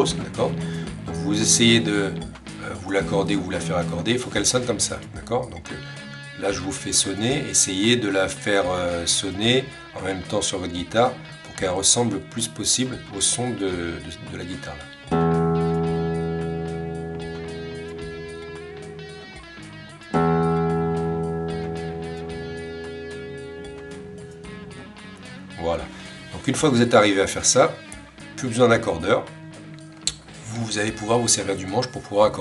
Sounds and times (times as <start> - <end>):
Speech: 0.0 - 5.8, 6.4 - 14.9, 25.6 - 27.8, 28.4 - 29.3, 30.4 - 32.4
Music: 0.0 - 32.4.